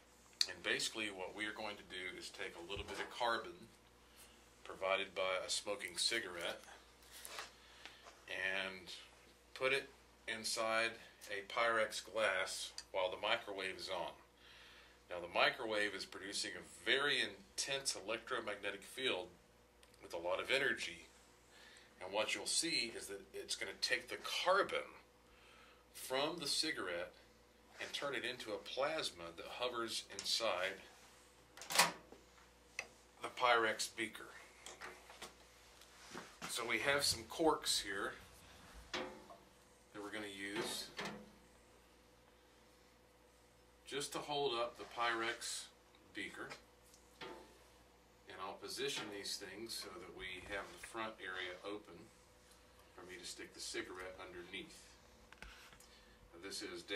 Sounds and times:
Speech: 0:00.4 - 0:03.8, 0:04.6 - 0:06.8, 0:08.3 - 0:14.3, 0:15.1 - 0:19.4, 0:20.0 - 0:21.2, 0:22.0 - 0:25.1, 0:26.0 - 0:30.9, 0:33.2 - 0:34.5, 0:36.5 - 0:38.2, 0:39.9 - 0:41.0, 0:43.9 - 0:46.6, 0:48.3 - 0:52.2, 0:53.0 - 0:55.0, 0:56.3 - 0:56.9.

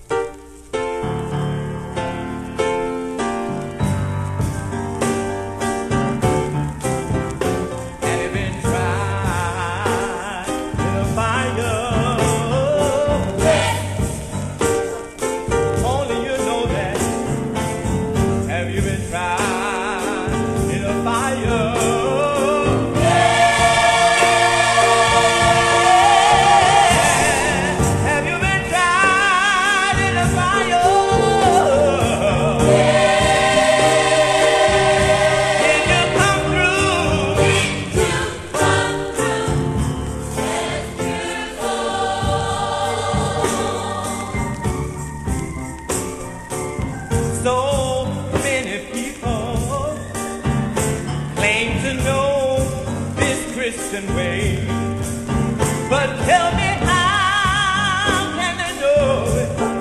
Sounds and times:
Choir: 0:11.0 - 0:14.5, 0:19.4 - 0:45.4.

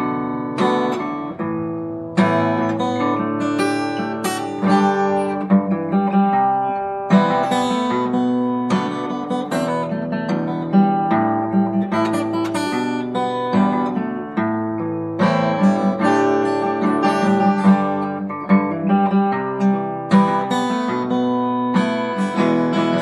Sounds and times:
Acoustic guitar: 0:00.0 - 0:23.0.

